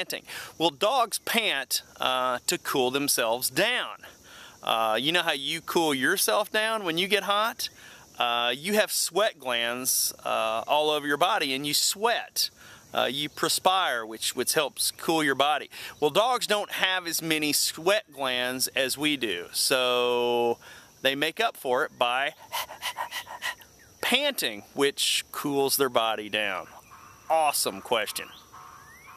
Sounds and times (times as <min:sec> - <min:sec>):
Speech: 0:00.0 - 0:04.0, 0:04.6 - 0:22.4, 0:24.0 - 0:26.7, 0:27.3 - 0:28.3.